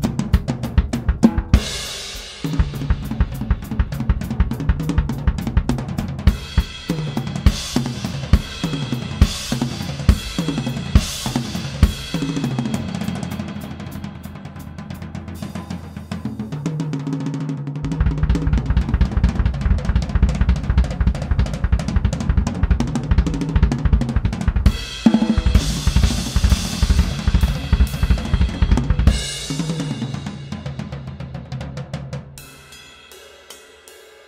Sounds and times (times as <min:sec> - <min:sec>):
Snare drum: 0:00.0 - 0:14.0, 0:17.9 - 0:30.7
Bass drum: 0:00.0 - 0:16.6, 0:17.8 - 0:32.4
Drum kit: 0:00.0 - 0:34.2.